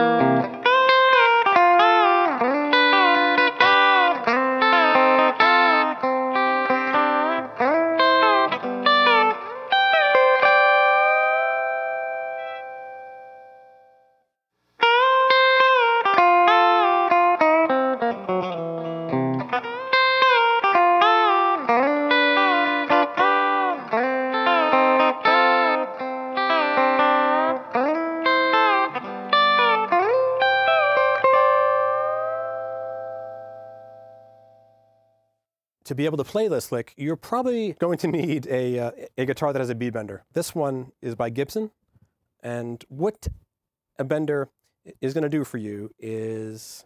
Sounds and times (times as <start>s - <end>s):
Blues: 0.0s - 13.5s, 14.8s - 34.5s
Electric guitar: 0.0s - 13.9s, 14.8s - 34.7s
Distortion: 0.0s - 35.2s.